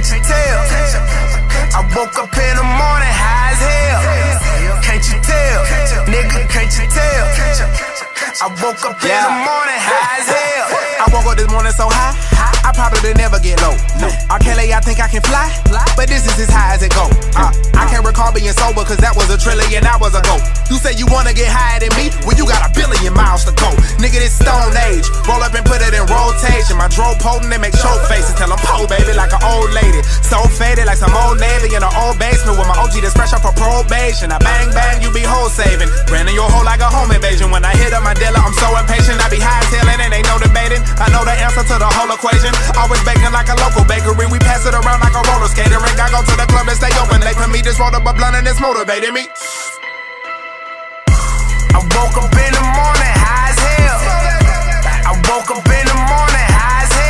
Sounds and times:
Music: 0.0s - 57.1s.

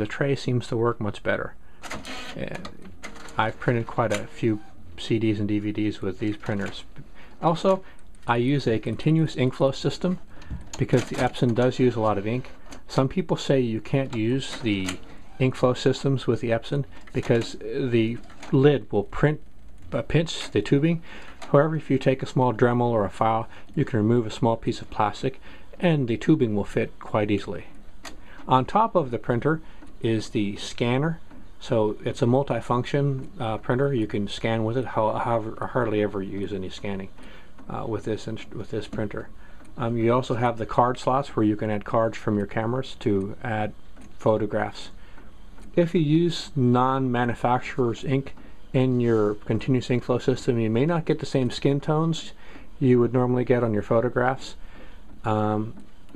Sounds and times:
Speech: 0.0s - 1.6s, 2.3s - 27.8s, 28.5s - 45.0s, 45.8s - 54.6s, 55.2s - 56.1s.

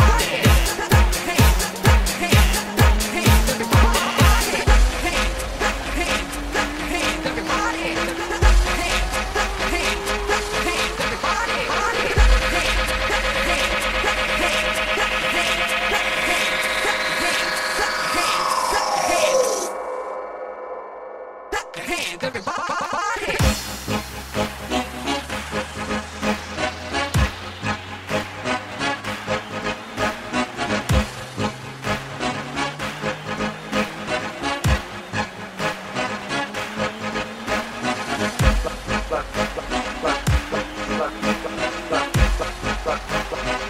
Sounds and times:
Electronic music: 0.0s - 43.6s.

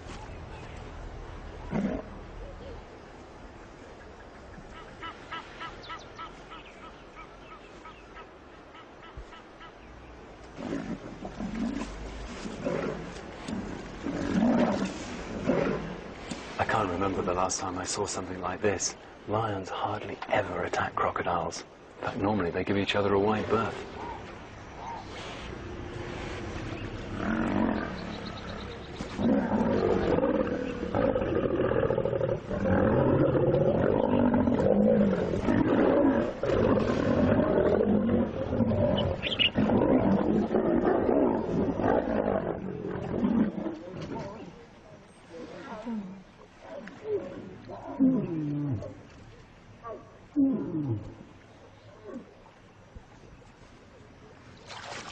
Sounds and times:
Roar: 1.7s - 2.2s, 10.6s - 16.1s, 24.0s - 44.6s, 45.3s - 49.0s, 49.8s - 51.3s.

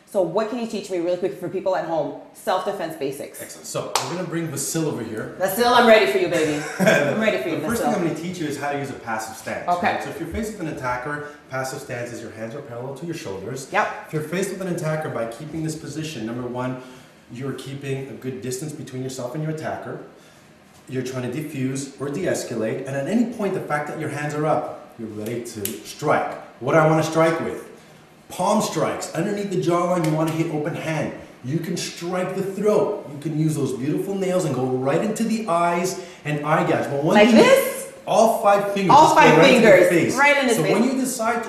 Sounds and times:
Speech: 0.1s - 20.1s, 20.9s - 27.7s, 28.3s - 41.4s.

